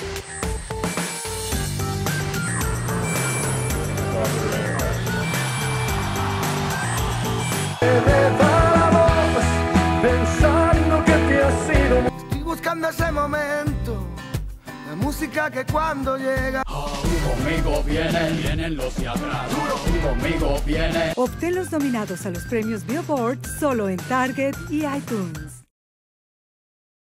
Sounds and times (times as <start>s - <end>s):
Music: 0.0s - 25.7s
Speech: 21.2s - 25.6s.